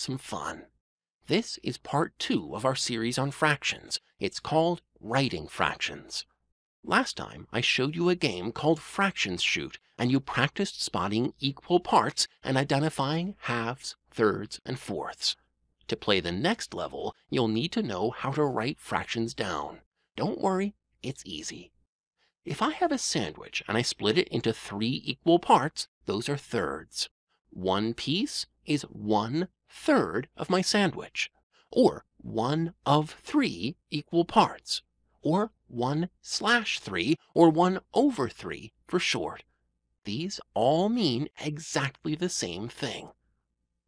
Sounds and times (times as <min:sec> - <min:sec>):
Speech: 0:00.0 - 0:06.3, 0:06.9 - 0:21.7, 0:22.4 - 0:39.5, 0:40.1 - 0:43.2.